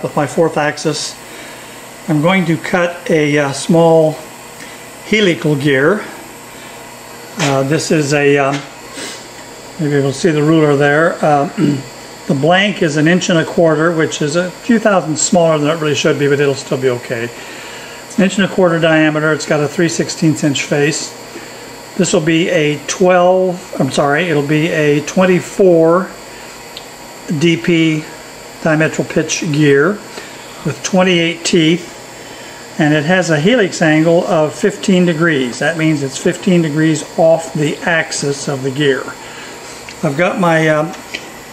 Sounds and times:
Speech: 0:00.0 - 0:01.2, 0:02.1 - 0:04.3, 0:05.1 - 0:06.2, 0:07.4 - 0:08.8, 0:09.8 - 0:17.4, 0:18.1 - 0:21.2, 0:22.0 - 0:26.2, 0:27.3 - 0:31.9, 0:32.8 - 0:39.2, 0:40.0 - 0:41.0.

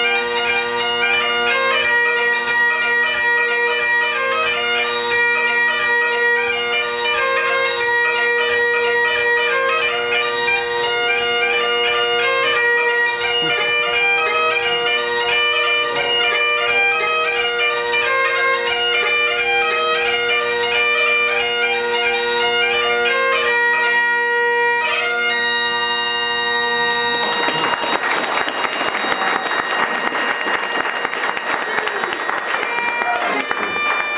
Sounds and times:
Bagpipes: 0:00.0 - 0:34.1.

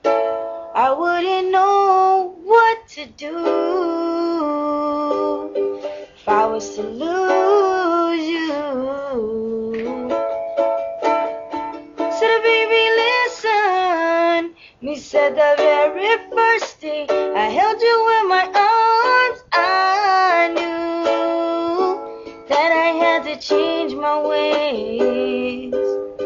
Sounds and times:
Music: 0:00.0 - 0:26.2.

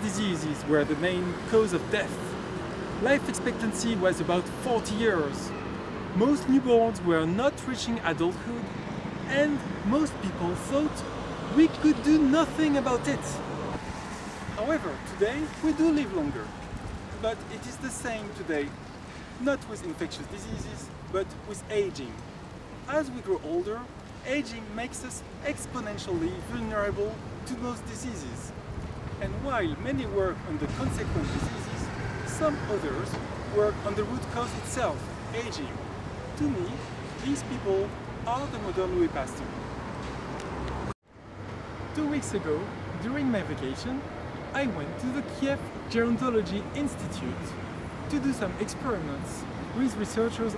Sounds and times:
Speech: 0:00.0 - 0:02.4, 0:03.0 - 0:05.5, 0:06.2 - 0:08.7, 0:09.3 - 0:13.5, 0:14.6 - 0:16.5, 0:17.2 - 0:18.8, 0:19.4 - 0:22.2, 0:22.9 - 0:28.5, 0:29.2 - 0:35.8, 0:36.4 - 0:39.5, 0:41.9 - 0:50.5.

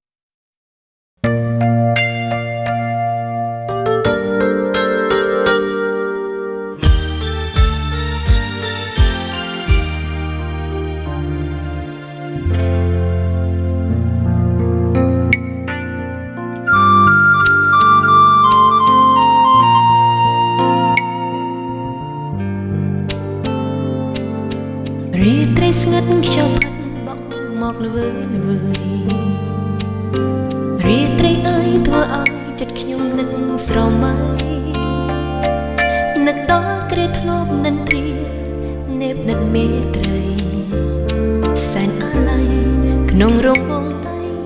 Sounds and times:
Music: 0:01.2 - 0:44.4.

